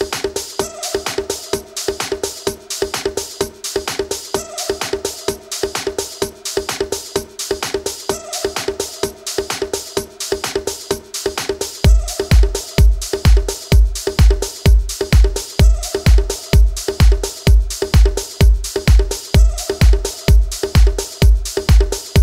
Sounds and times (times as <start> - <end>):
Disco: 0.0 - 22.2
Rhythm and blues: 0.0 - 22.2.